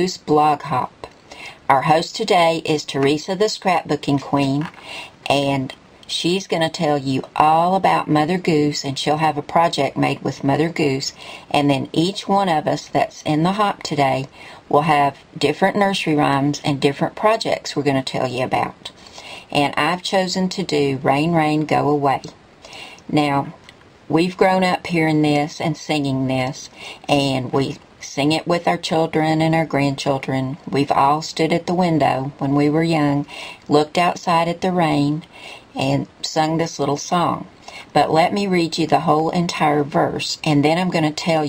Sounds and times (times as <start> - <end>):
Speech: 0.0 - 22.4, 23.1 - 41.4.